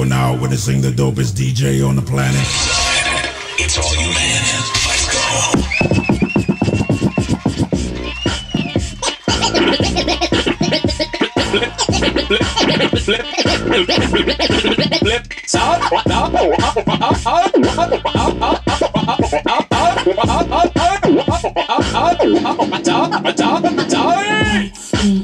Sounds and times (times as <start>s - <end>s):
Hip hop music: 0.0s - 25.2s.